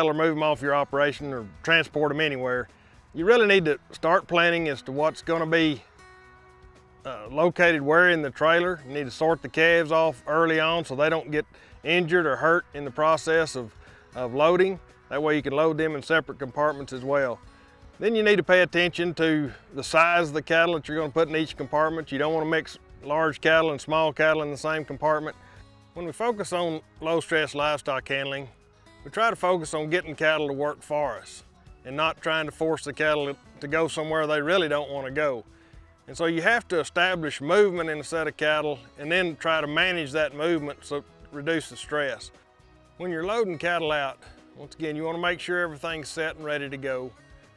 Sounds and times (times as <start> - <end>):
Speech: 0.0 - 5.8, 7.1 - 17.4, 18.0 - 25.3, 26.0 - 28.5, 29.1 - 35.4, 36.1 - 42.3, 43.0 - 47.1.